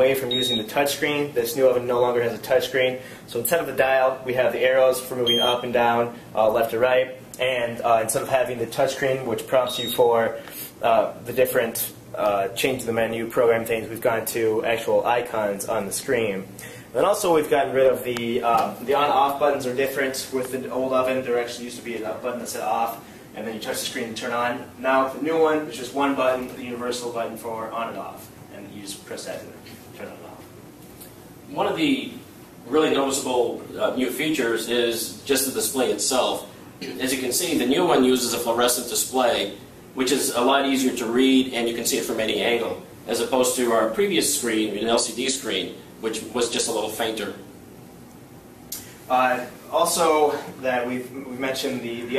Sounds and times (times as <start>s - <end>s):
Speech: 0.0s - 30.5s, 31.5s - 47.5s, 49.1s - 52.1s.